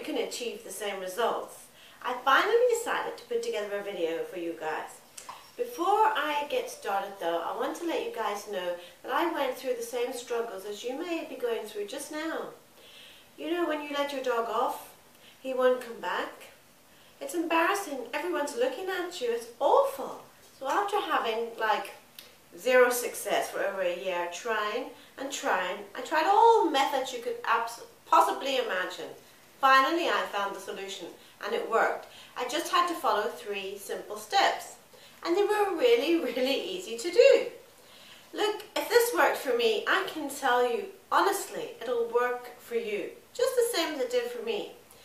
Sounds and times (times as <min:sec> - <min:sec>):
Speech: 0:00.0 - 0:12.6, 0:13.4 - 0:16.6, 0:17.2 - 0:37.6, 0:38.3 - 0:44.8.